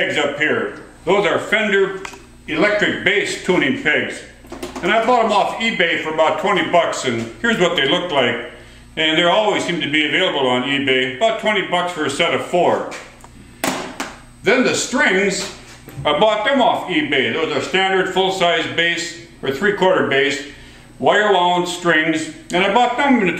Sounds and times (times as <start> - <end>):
Speech: 0.0 - 13.1, 14.4 - 23.3.